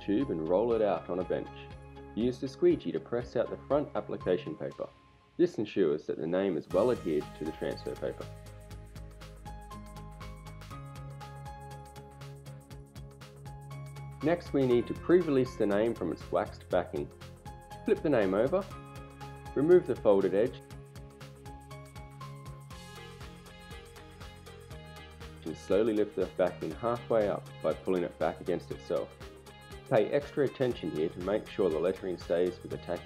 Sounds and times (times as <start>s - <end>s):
Speech: 0.0s - 8.3s, 14.2s - 17.1s, 17.9s - 18.7s, 19.6s - 20.6s, 25.4s - 29.1s, 29.9s - 33.0s
Music: 0.0s - 33.0s.